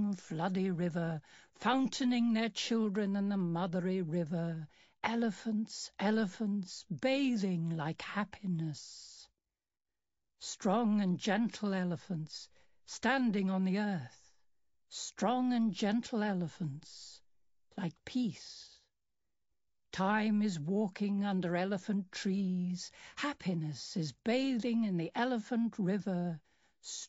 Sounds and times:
Speech: 0:00.0 - 0:09.3, 0:10.4 - 0:14.3, 0:14.9 - 0:17.2, 0:17.8 - 0:18.8, 0:20.0 - 0:27.0.

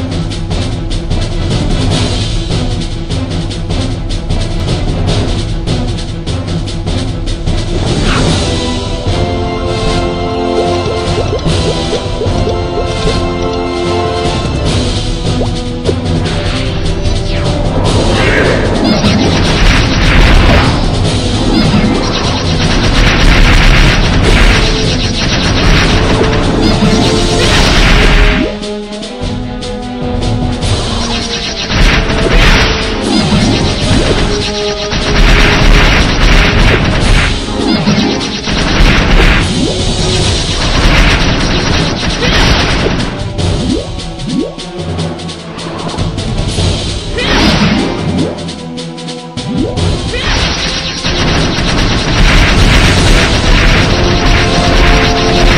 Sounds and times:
Music: 0:00.0 - 0:55.5.

